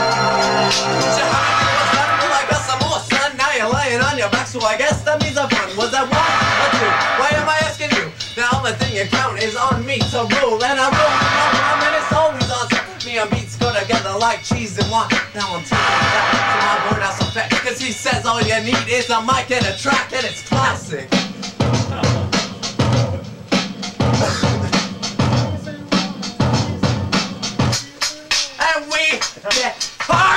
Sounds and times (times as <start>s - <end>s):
Rock music: 0.0s - 30.3s.